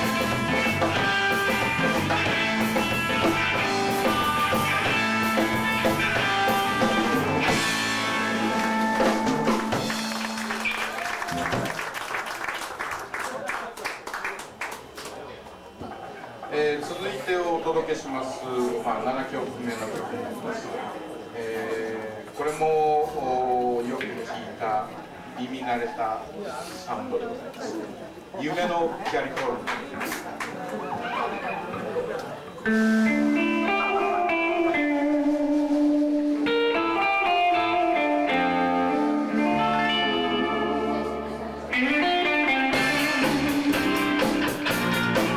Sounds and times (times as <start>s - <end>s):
Music: 0.0s - 11.8s, 32.7s - 45.3s.